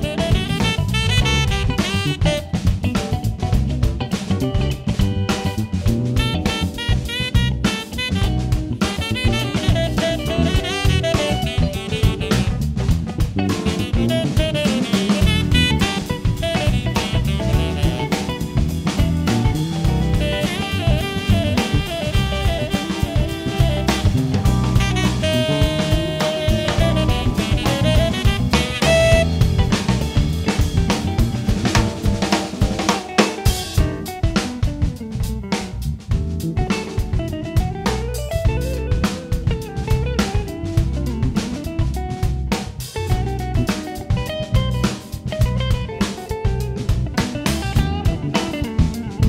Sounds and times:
Music: 0.0s - 49.2s.

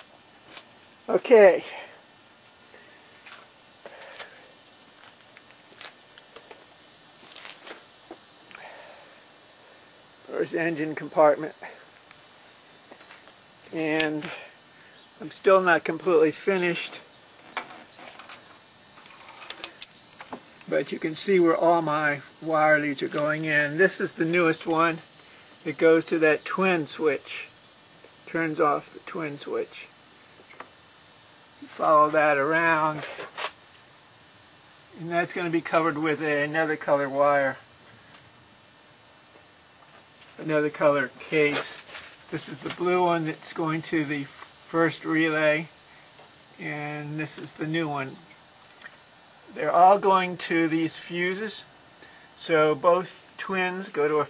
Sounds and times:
Speech: 1.1s - 1.9s, 10.3s - 11.8s, 13.7s - 14.5s, 15.2s - 17.0s, 20.7s - 25.0s, 25.6s - 27.5s, 28.3s - 29.9s, 31.6s - 33.2s, 34.9s - 37.6s, 40.4s - 45.7s, 46.6s - 48.2s, 49.5s - 51.7s, 52.4s - 54.2s.

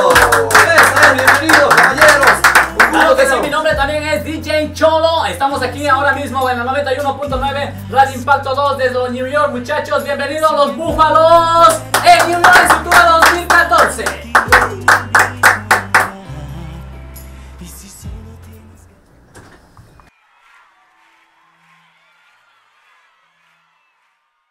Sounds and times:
Speech: 0.0s - 14.2s
Music: 0.0s - 24.5s.

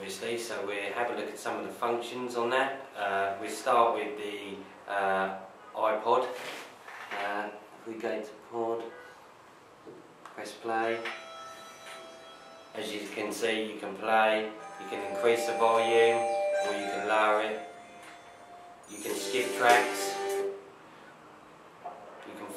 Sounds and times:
Speech: 0.0s - 6.4s, 7.2s - 9.0s, 10.4s - 11.1s, 12.8s - 17.6s, 18.9s - 20.2s, 22.2s - 22.5s.

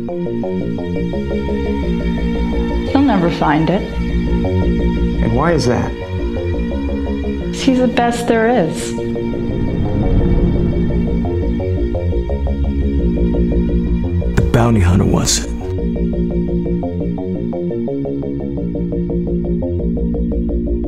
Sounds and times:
Music: 0.0s - 20.8s
Speech: 14.4s - 15.7s.

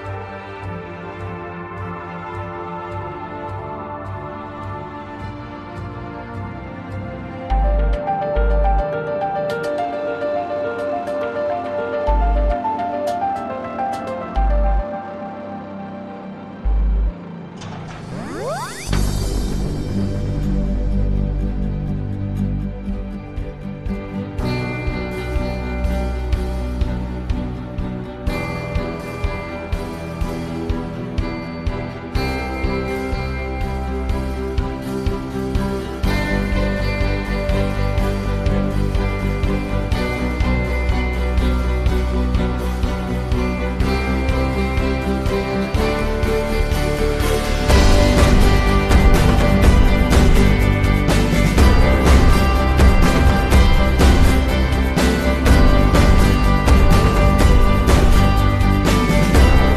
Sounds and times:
Music: 0.0s - 59.7s.

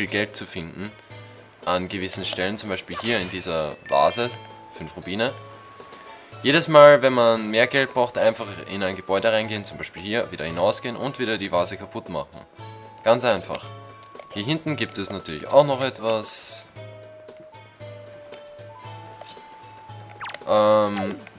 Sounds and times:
Speech: 0.0s - 0.9s, 1.7s - 5.4s, 6.5s - 12.4s, 13.0s - 13.6s, 14.3s - 16.7s, 20.5s - 21.2s
Music: 0.0s - 21.3s.

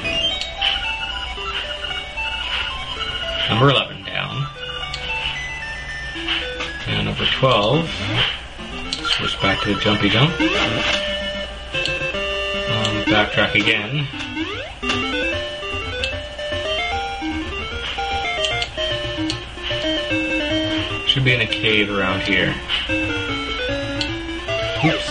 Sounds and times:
Music: 0.0s - 25.1s
Speech: 3.5s - 4.4s, 6.9s - 8.2s, 9.1s - 10.4s, 12.7s - 14.1s, 21.1s - 22.6s, 24.8s - 25.1s.

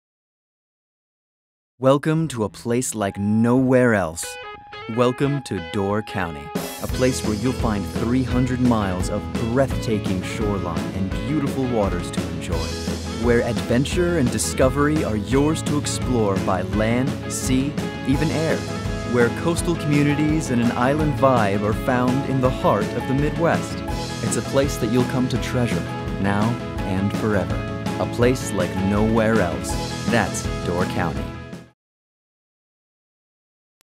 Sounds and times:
Speech: 1.8s - 31.3s
Music: 2.3s - 31.8s.

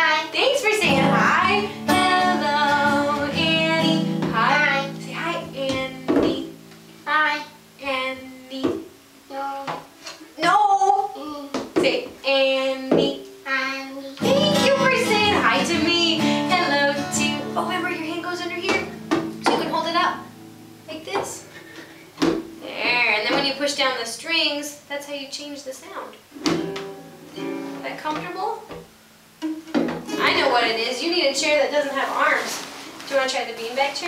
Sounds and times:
Speech: 0.0s - 1.5s, 10.4s - 16.1s, 17.6s - 20.2s, 22.6s - 26.2s, 27.8s - 28.7s, 30.1s - 34.0s
Music: 0.7s - 10.0s, 12.3s - 23.8s, 26.3s - 34.0s.

